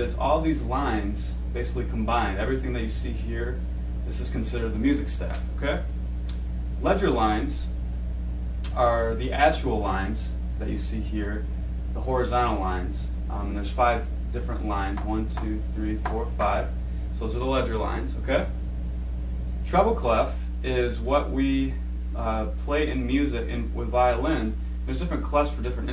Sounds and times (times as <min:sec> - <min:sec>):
Speech: 0:00.0 - 0:05.9, 0:06.8 - 0:07.8, 0:08.7 - 0:18.6, 0:19.6 - 0:25.9.